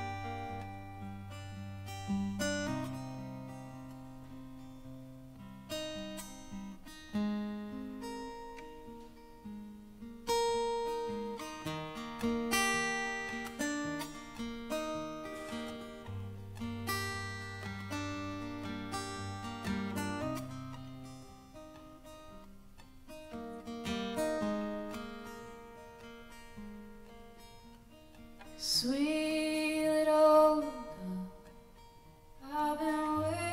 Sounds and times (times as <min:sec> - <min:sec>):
Music: 0:00.0 - 0:33.5.